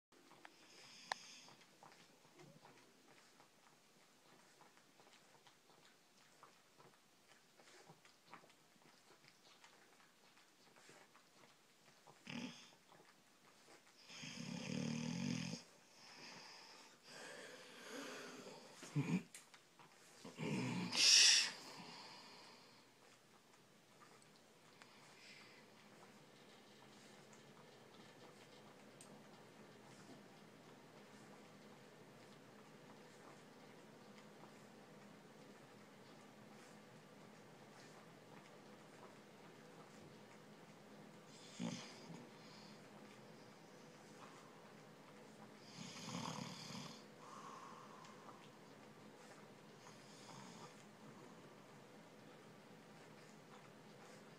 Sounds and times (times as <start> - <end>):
Dog: 0.2 - 54.3
Snort: 0.4 - 1.7, 12.1 - 12.8, 14.0 - 19.4, 20.2 - 22.8, 41.3 - 42.9, 45.6 - 48.4, 49.2 - 51.4.